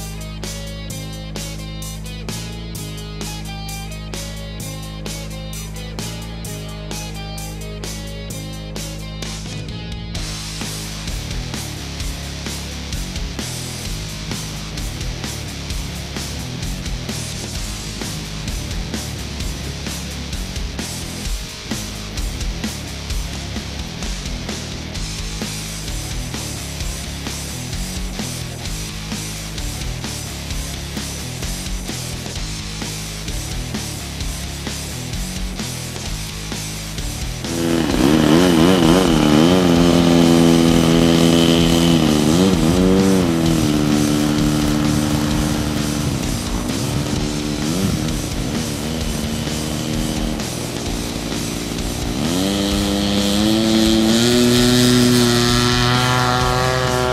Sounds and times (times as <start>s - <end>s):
Music: 0.0s - 57.1s.